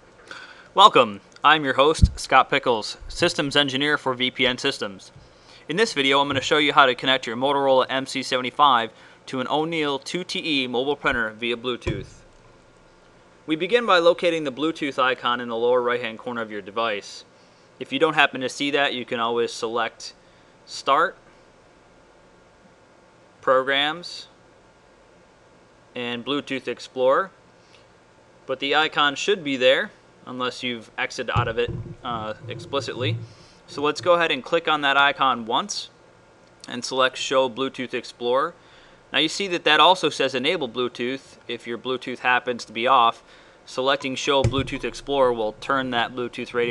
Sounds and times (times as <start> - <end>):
Speech: 0.8 - 12.1, 13.5 - 21.2, 23.4 - 24.4, 25.9 - 27.4, 28.5 - 36.0, 36.6 - 46.7.